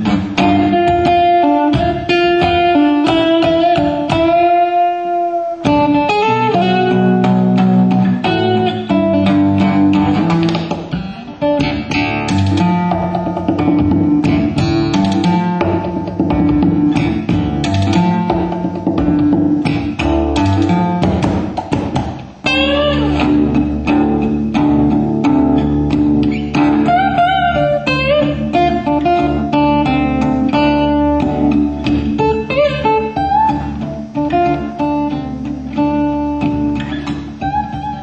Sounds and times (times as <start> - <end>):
Guitar: 0.0 - 38.0.